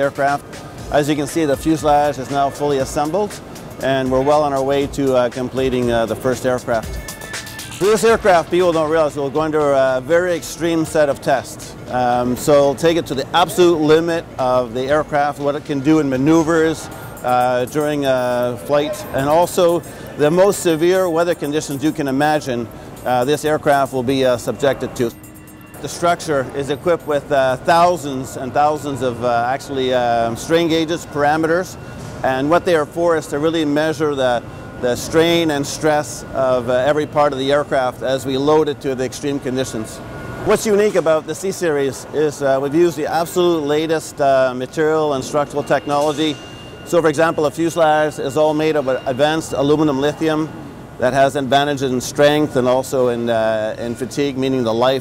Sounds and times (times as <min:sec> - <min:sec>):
Speech: 0:00.0 - 0:06.8, 0:07.8 - 0:25.2, 0:25.8 - 0:55.0
Music: 0:00.0 - 0:13.8, 0:14.6 - 0:29.0.